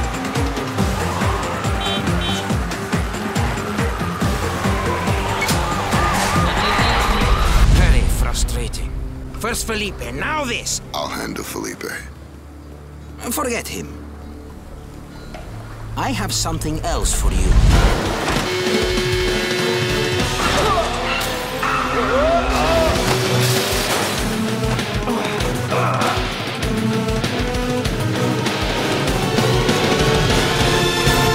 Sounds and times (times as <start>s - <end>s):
Music: 0.0s - 31.3s.